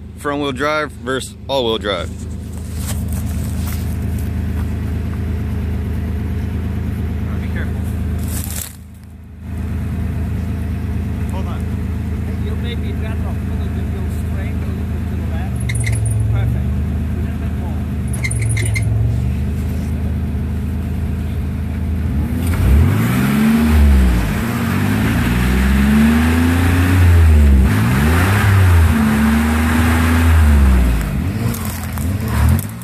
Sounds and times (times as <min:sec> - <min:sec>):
Car: 0:00.0 - 0:32.8
Speech: 0:00.2 - 0:02.2, 0:07.2 - 0:08.0, 0:11.2 - 0:15.6, 0:16.3 - 0:17.9.